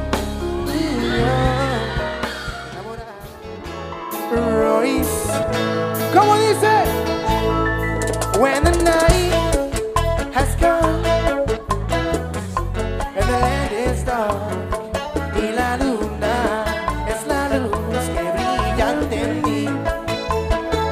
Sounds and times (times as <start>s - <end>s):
Music: 0.0s - 20.9s
Singing: 0.6s - 3.4s, 15.4s - 20.0s.